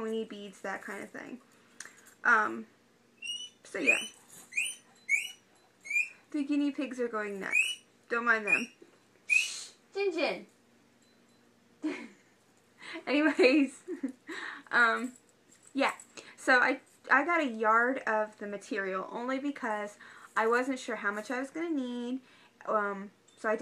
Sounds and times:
Speech: 0:00.0 - 0:01.4, 0:02.2 - 0:02.7, 0:03.7 - 0:04.1, 0:06.3 - 0:08.7, 0:10.0 - 0:10.5, 0:13.0 - 0:13.7, 0:14.7 - 0:15.2, 0:15.8 - 0:23.6
Inside, small room: 0:00.0 - 0:23.6.

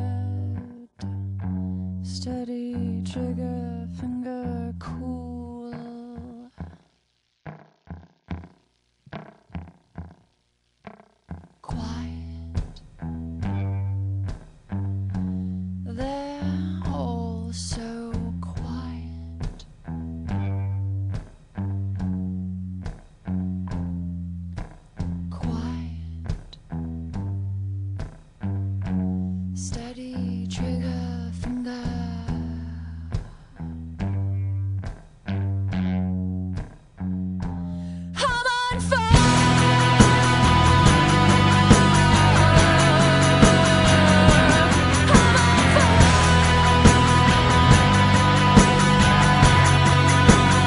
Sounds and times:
Music: 0:00.0 - 0:50.6.

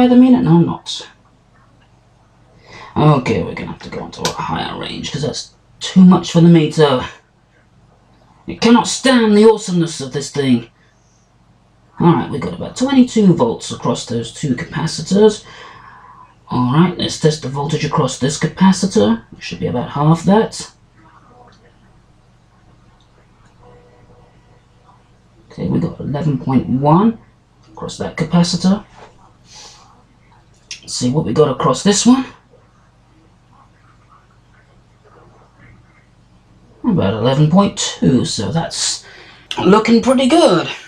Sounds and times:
Speech: 0:00.0 - 0:01.2, 0:02.9 - 0:07.2, 0:08.4 - 0:10.8, 0:12.0 - 0:15.5, 0:16.2 - 0:21.9, 0:24.9 - 0:29.2, 0:30.7 - 0:32.5, 0:36.8 - 0:40.8.

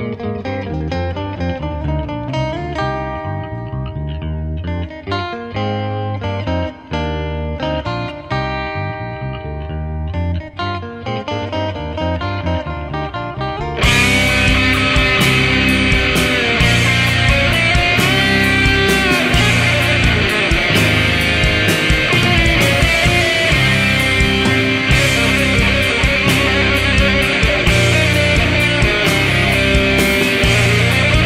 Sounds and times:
Progressive rock: 0:00.0 - 0:31.2
Heavy metal: 0:13.8 - 0:31.2.

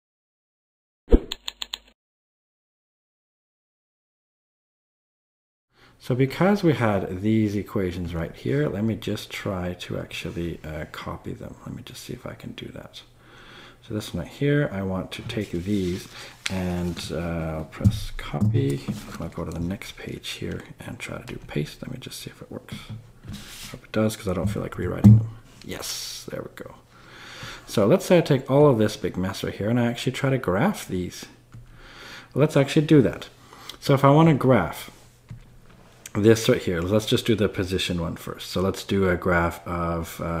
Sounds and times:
Speech: 0:06.0 - 0:13.1, 0:13.8 - 0:23.0, 0:23.7 - 0:26.8, 0:27.7 - 0:31.4, 0:32.3 - 0:35.0, 0:36.1 - 0:40.4.

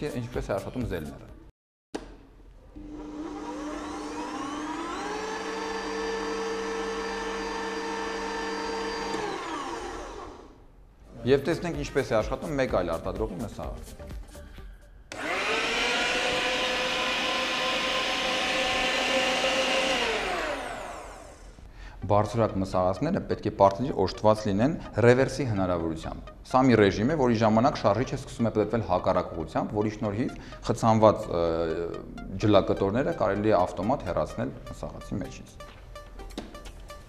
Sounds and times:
Blender: 0:02.7 - 0:10.6, 0:15.1 - 0:21.7.

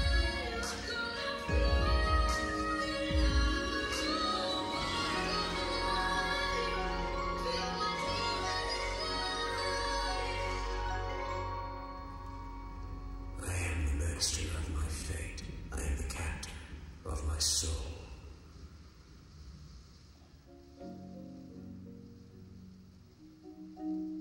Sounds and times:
Tubular bells: 0:00.0 - 0:15.9.

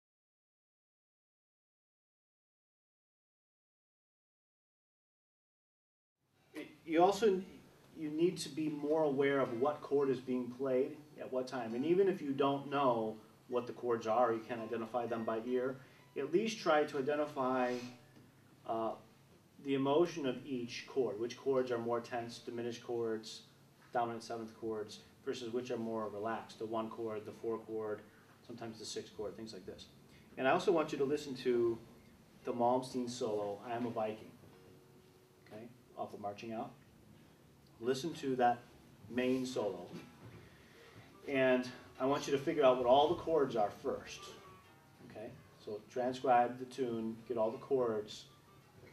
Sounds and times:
Speech: 0:06.6 - 0:18.0, 0:18.6 - 0:34.4, 0:35.5 - 0:36.8, 0:37.8 - 0:40.1, 0:41.2 - 0:44.5, 0:45.1 - 0:48.3.

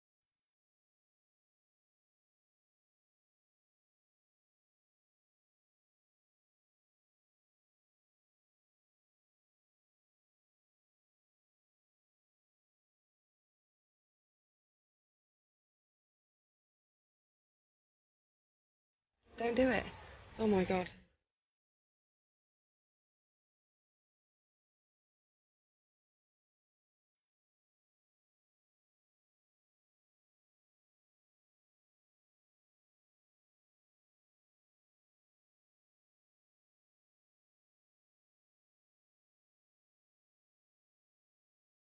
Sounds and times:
Silence: 0:00.0 - 0:18.4, 0:19.3 - 0:21.6, 0:22.3 - 0:41.8.

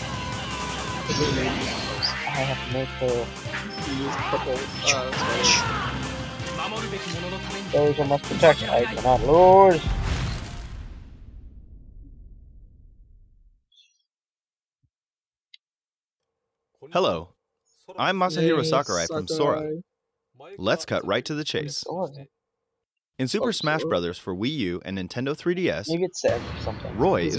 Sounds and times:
Speech: 0:02.3 - 0:03.3, 0:03.9 - 0:05.7, 0:06.6 - 0:09.9, 0:17.9 - 0:19.8, 0:20.4 - 0:22.3, 0:23.2 - 0:27.3.

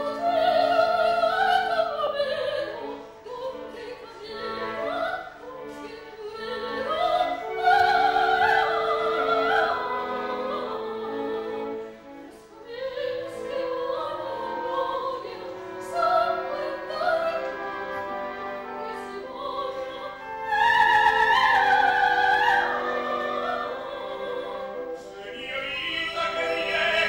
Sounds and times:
Opera: 0:00.0 - 0:27.0.

